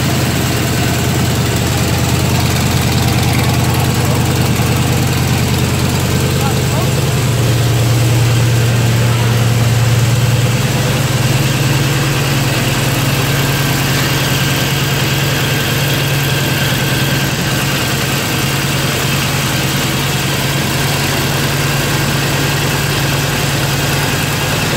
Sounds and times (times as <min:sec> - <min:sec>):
Vehicle: 0:00.0 - 0:24.7.